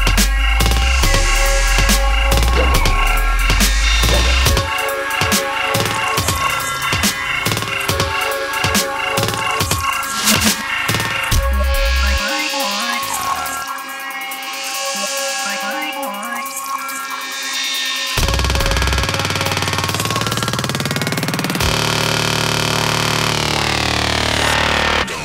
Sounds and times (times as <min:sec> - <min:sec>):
Dubstep: 0:00.0 - 0:20.5.